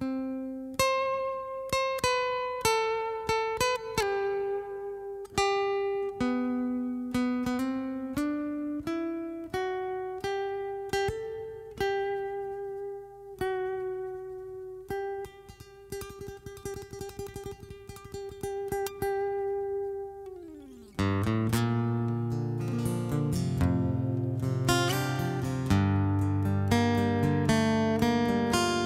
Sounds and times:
Guitar: 0.0s - 28.8s.

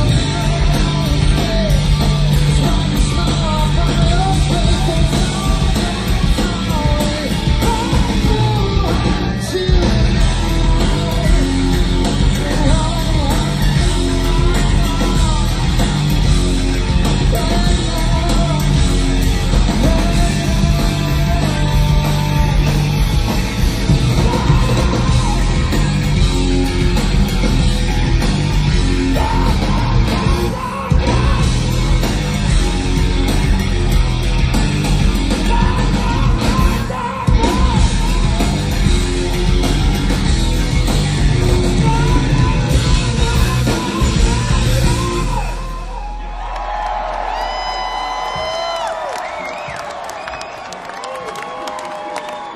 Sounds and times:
Rock music: 0.0s - 50.6s.

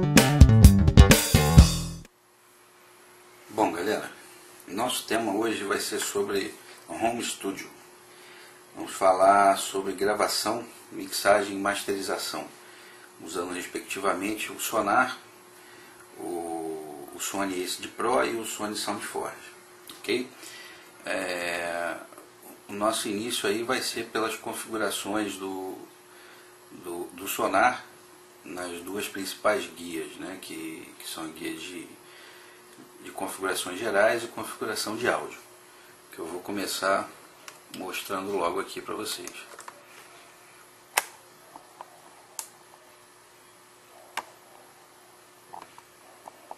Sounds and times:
Speech: 3.5s - 7.8s, 8.8s - 12.6s, 13.2s - 15.3s, 16.2s - 20.4s, 21.0s - 25.9s, 26.7s - 32.0s, 32.9s - 35.5s, 36.1s - 39.6s.

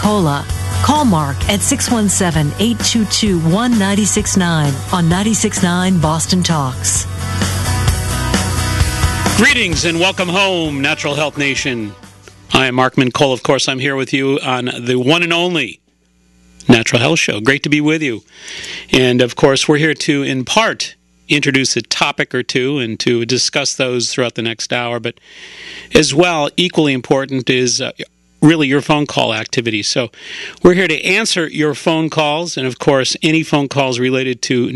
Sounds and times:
Speech: 0.0s - 7.0s, 9.4s - 15.8s, 16.6s - 18.3s, 18.9s - 25.2s, 25.9s - 34.7s.

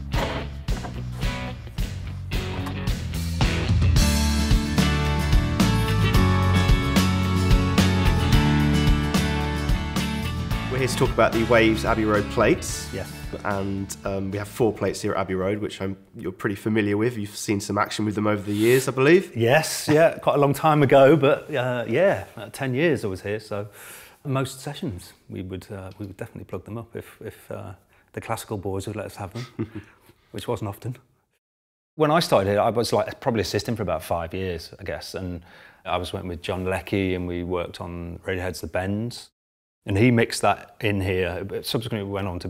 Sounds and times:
Speech: 10.7s - 29.6s, 30.3s - 31.1s, 32.0s - 39.3s, 39.9s - 42.5s.

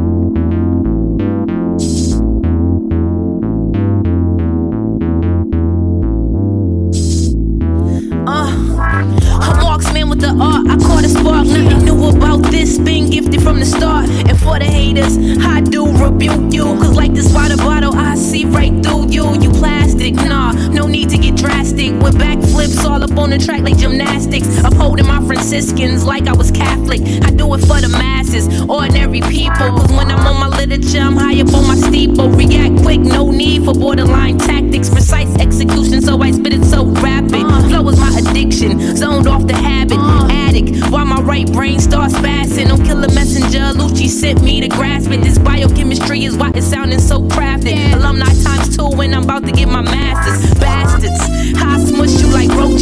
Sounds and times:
Music: 0.0s - 52.8s.

